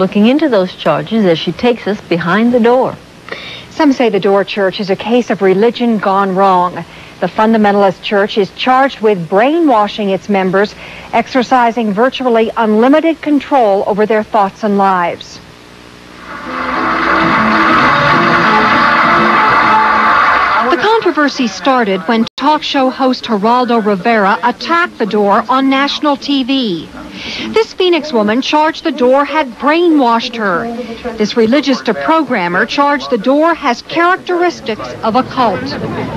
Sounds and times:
Speech: 0.0s - 3.0s, 3.7s - 15.4s, 20.6s - 36.1s.

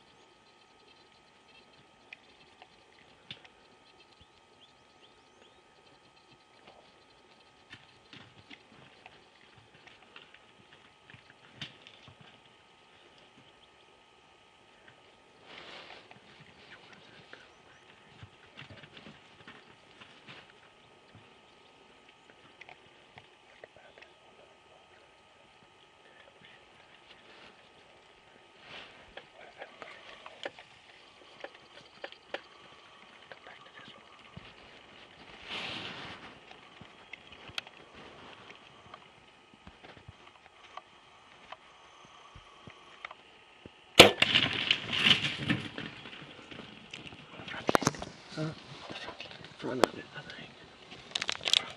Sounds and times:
Cap gun: 44.0s - 44.3s.

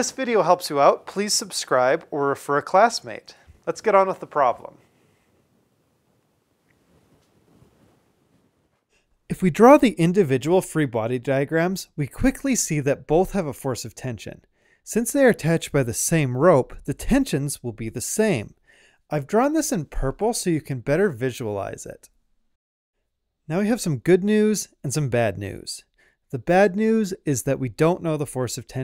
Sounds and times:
Speech: 0.0s - 4.8s, 9.3s - 22.1s, 23.5s - 28.8s.

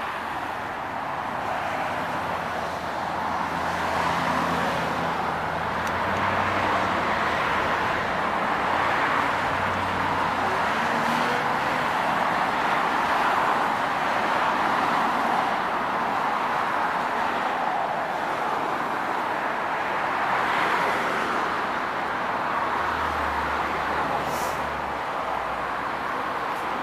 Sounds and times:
Vehicle: 0.0s - 26.8s.

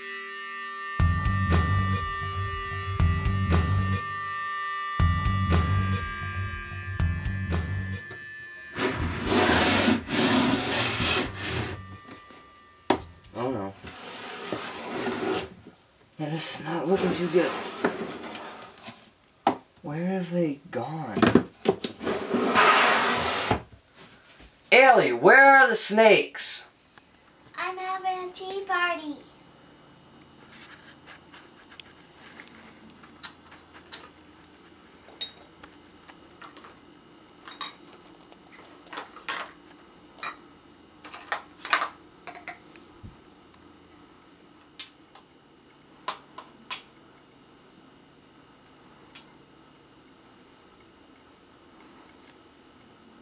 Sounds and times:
Speech: 16.2s - 17.6s, 19.8s - 21.4s, 24.7s - 26.7s, 27.6s - 29.3s.

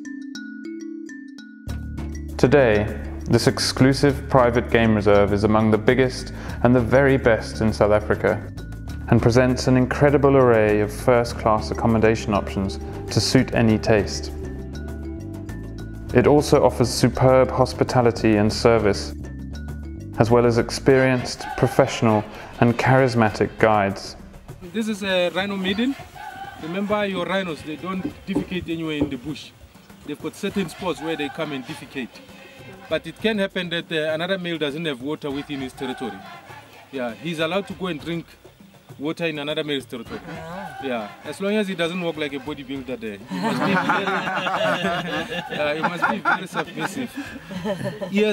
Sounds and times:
Music: 0.0s - 48.3s
Speech: 2.4s - 8.4s, 9.1s - 14.3s, 16.2s - 19.1s, 20.2s - 24.2s.

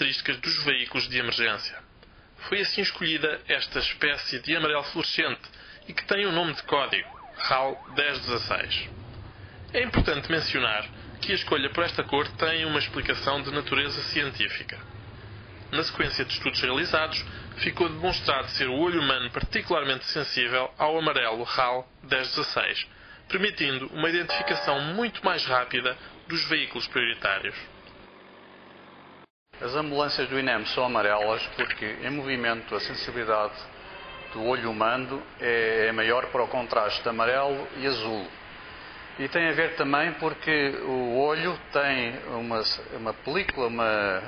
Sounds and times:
Speech: 0.0s - 8.9s, 9.7s - 14.8s, 15.7s - 27.7s, 29.6s - 33.7s, 34.3s - 38.3s, 39.2s - 44.2s
Ambulance (siren): 5.7s - 9.0s, 24.3s - 25.1s.

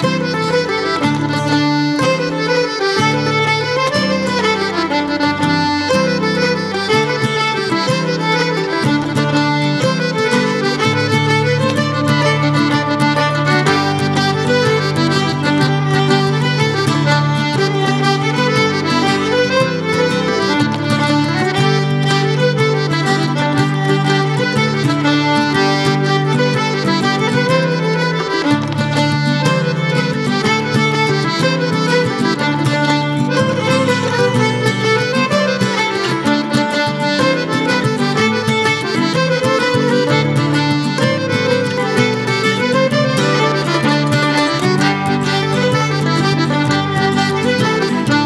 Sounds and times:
Violin, fiddle: 0.0s - 48.2s.

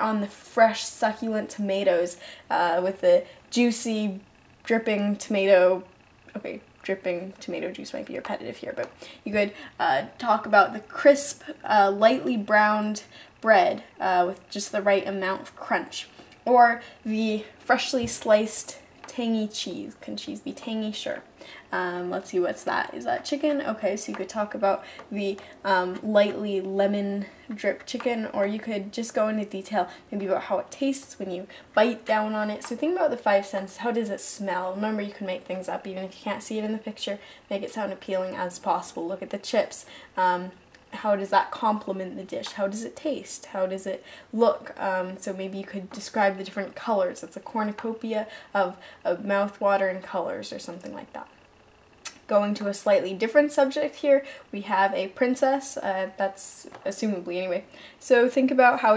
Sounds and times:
Speech: 0.0s - 51.4s, 52.1s - 58.9s.

